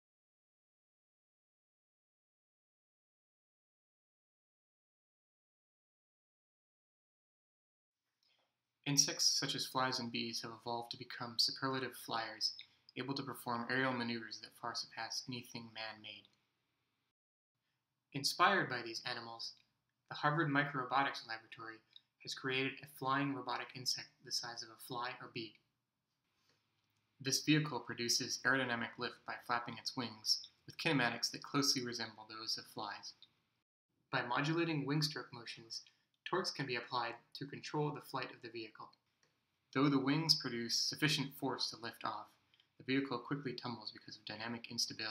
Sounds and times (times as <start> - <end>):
Speech: 8.9 - 16.4, 18.2 - 25.6, 27.2 - 33.3, 34.1 - 39.0, 39.8 - 45.1.